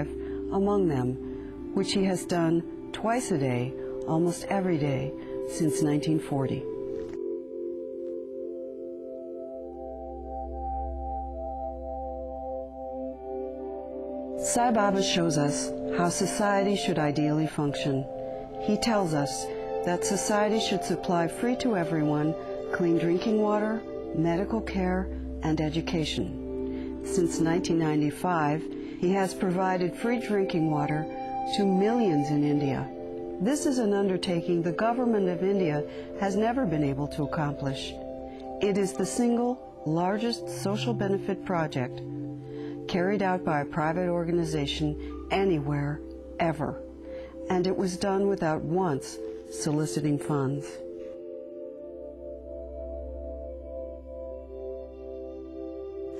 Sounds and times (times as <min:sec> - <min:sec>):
Speech: 0:00.0 - 0:01.2, 0:01.8 - 0:06.7, 0:14.4 - 0:26.4, 0:27.0 - 0:38.0, 0:38.6 - 0:42.0, 0:42.9 - 0:46.8, 0:47.5 - 0:50.8
Music: 0:00.0 - 0:56.1.